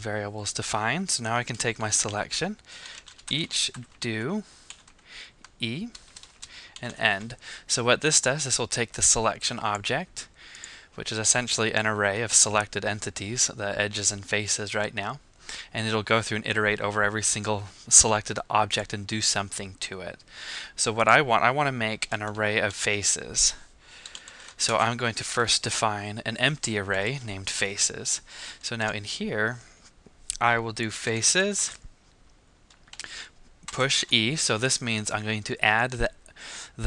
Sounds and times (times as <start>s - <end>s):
Speech: 0.0s - 2.6s, 3.3s - 4.5s, 5.6s - 6.0s, 6.8s - 10.3s, 11.0s - 20.2s, 20.8s - 23.6s, 24.6s - 29.7s, 30.3s - 31.8s, 33.7s - 36.2s.